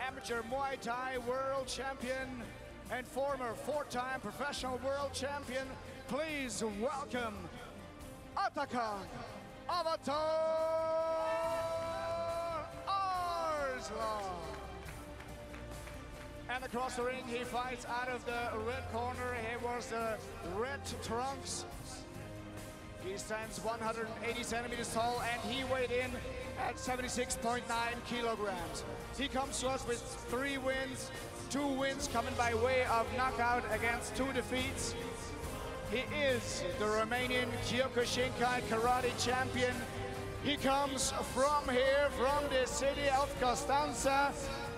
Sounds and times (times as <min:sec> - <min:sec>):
Speech: 0:00.0 - 0:07.7, 0:08.4 - 0:14.6, 0:16.5 - 0:22.0, 0:23.0 - 0:35.3, 0:35.9 - 0:44.7
Music: 0:00.0 - 0:44.7.